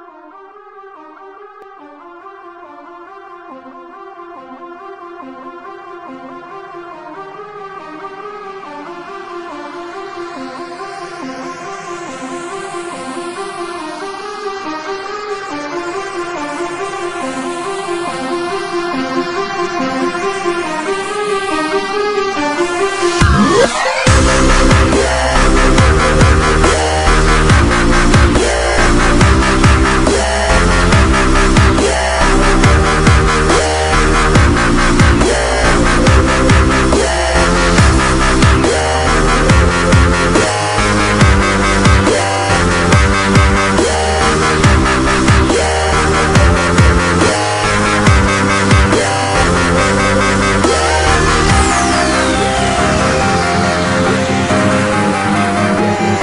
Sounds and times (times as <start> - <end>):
Dubstep: 7.7 - 56.2.